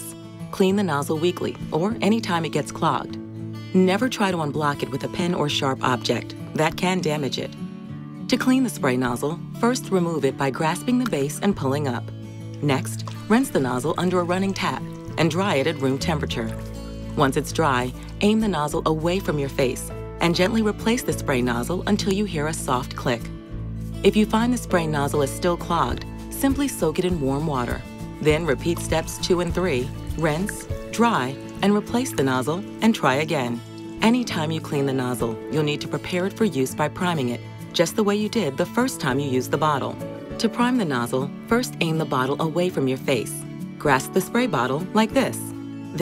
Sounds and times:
Speech: 0.0 - 3.2, 3.8 - 7.6, 8.3 - 16.6, 17.2 - 23.3, 24.0 - 46.0
Music: 0.0 - 46.0.

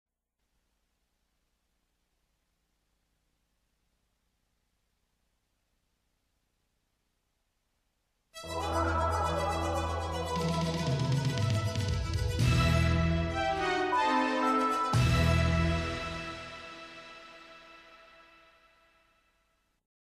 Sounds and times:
Soundtrack music: 8.4 - 18.6
Theme music: 8.4 - 18.7.

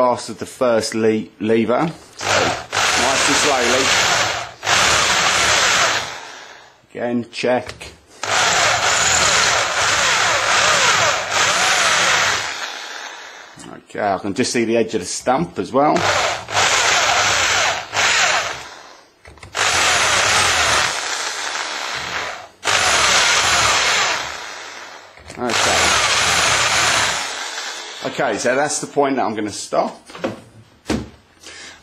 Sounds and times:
Speech: 0.0 - 2.0, 3.0 - 4.0, 6.9 - 8.0, 13.6 - 16.0, 25.3 - 25.9, 28.0 - 30.1.

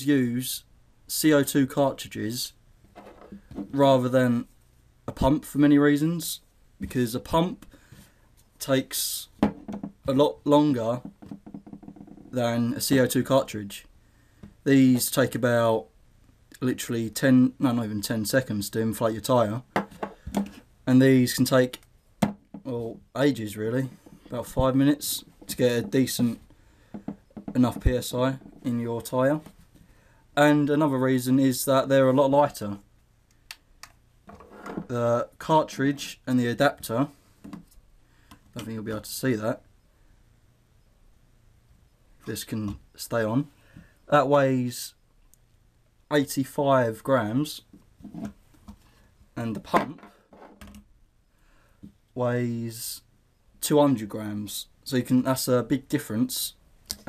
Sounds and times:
Speech: 0.0 - 2.6, 3.7 - 4.5, 5.1 - 7.6, 8.6 - 9.4, 10.1 - 11.1, 12.3 - 13.9, 14.6 - 15.9, 16.6 - 19.7, 20.9 - 21.8, 22.6 - 26.4, 27.5 - 29.5, 30.4 - 32.8, 34.9 - 37.2, 38.6 - 39.6, 42.3 - 43.5, 44.1 - 45.0, 46.1 - 47.7, 49.4 - 50.0, 52.2 - 56.6.

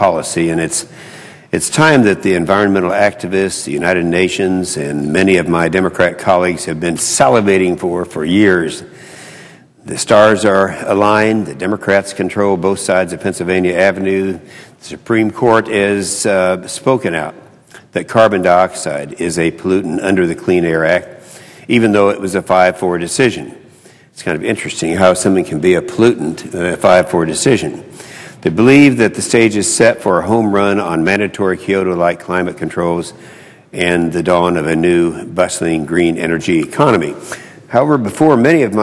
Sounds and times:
Male speech, man speaking: 0.0 - 0.9, 1.6 - 8.9, 9.9 - 21.1, 21.7 - 23.6, 24.2 - 33.2, 33.8 - 38.8
Narration, monologue: 0.0 - 38.8.

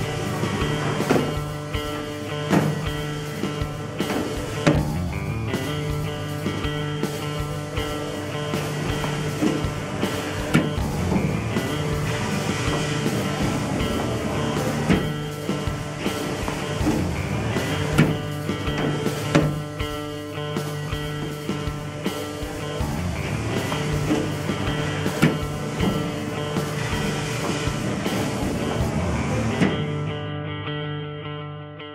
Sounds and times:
Music: 0.0 - 31.9.

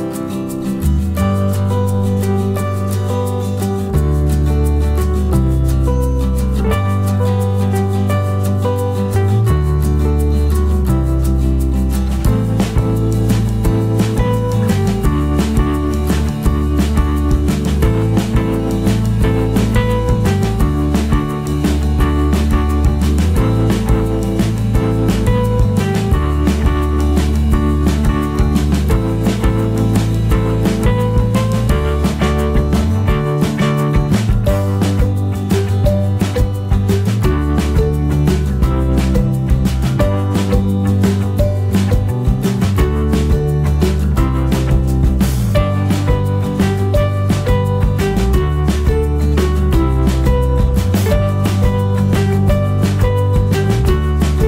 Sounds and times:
Music: 0.0 - 54.4.

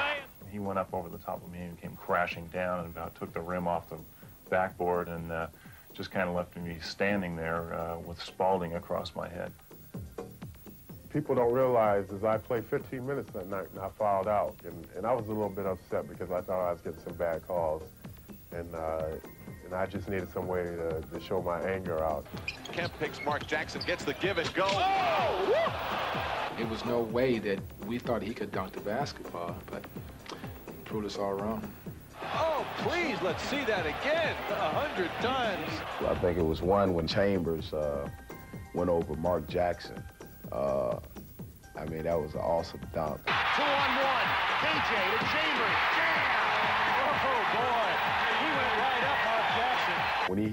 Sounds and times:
Speech: 0.0 - 9.5, 11.1 - 17.8, 18.5 - 25.2, 26.6 - 29.8, 30.8 - 31.7, 32.4 - 38.1, 38.8 - 41.0, 41.8 - 46.2, 47.0 - 50.5
Music: 0.0 - 50.5.

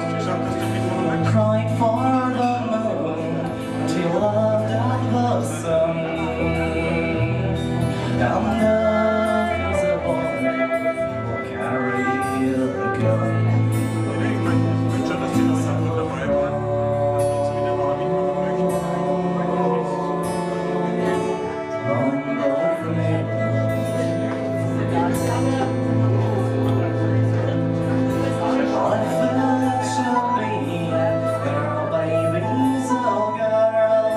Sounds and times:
Music: 0.0 - 34.1
Speech: 0.0 - 34.1.

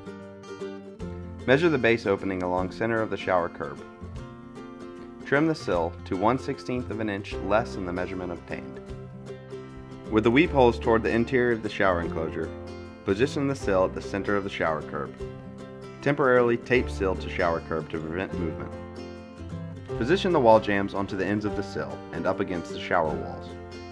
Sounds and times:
Music: 0.0 - 23.9
Speech: 1.5 - 3.9, 5.2 - 8.8, 10.1 - 12.5, 13.1 - 15.2, 16.0 - 18.7, 20.0 - 23.5.

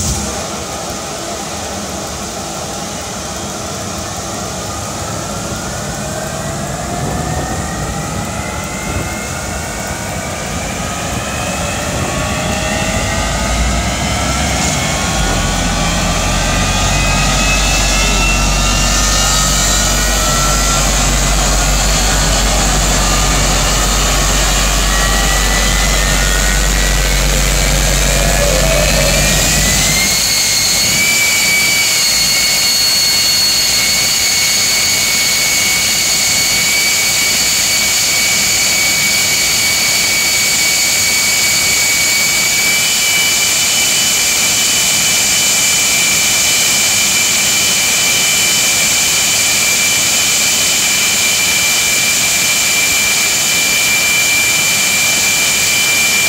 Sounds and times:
Vehicle: 0.0 - 56.2.

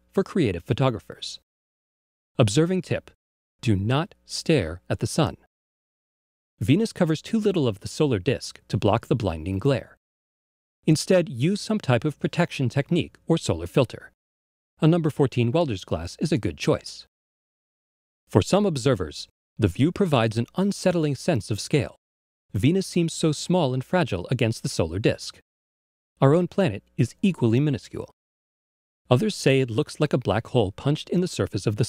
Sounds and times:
Speech: 0.0 - 1.4, 2.4 - 5.5, 6.6 - 10.0, 10.8 - 14.2, 14.8 - 17.1, 18.3 - 25.4, 26.2 - 28.2, 29.1 - 31.8.

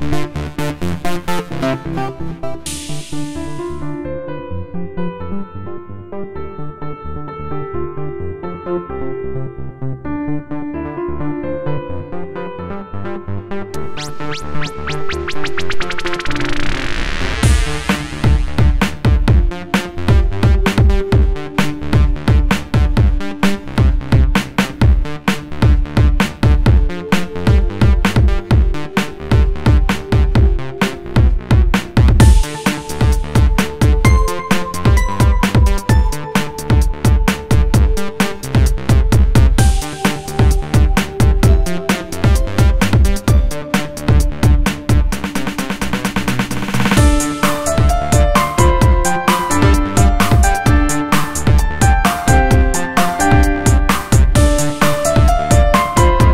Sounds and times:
Electronica: 0.0 - 8.9, 10.1 - 56.3.

